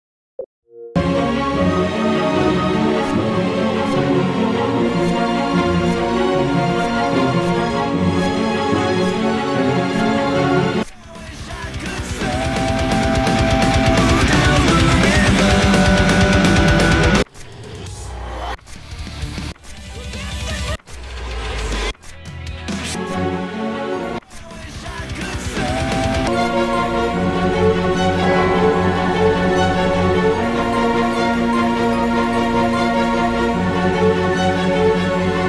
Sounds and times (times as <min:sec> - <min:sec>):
Music: 0:00.7 - 0:35.4.